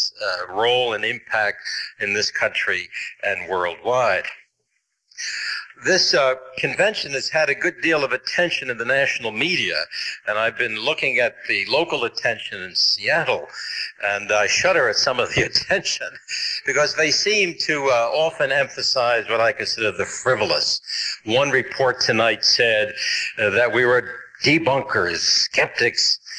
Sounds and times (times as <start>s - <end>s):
Male speech, man speaking: 0.0s - 4.4s, 5.2s - 26.3s
Narration, monologue: 0.0s - 26.3s.